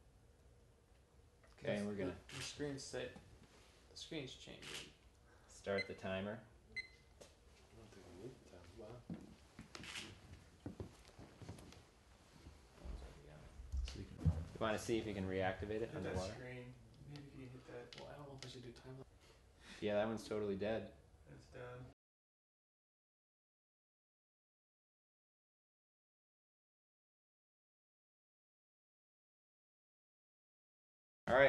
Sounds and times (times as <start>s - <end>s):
Speech: 1.6s - 3.2s, 4.0s - 4.8s, 13.0s - 19.1s, 19.8s - 22.0s, 31.3s - 31.4s.